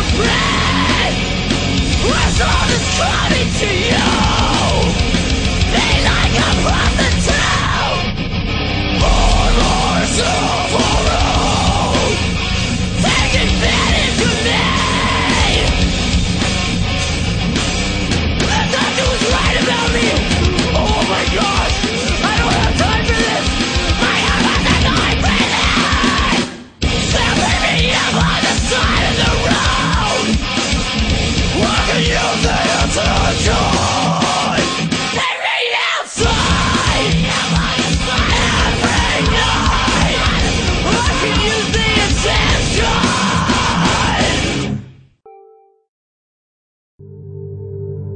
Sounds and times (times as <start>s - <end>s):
Music: 0.0s - 45.9s, 47.0s - 48.1s.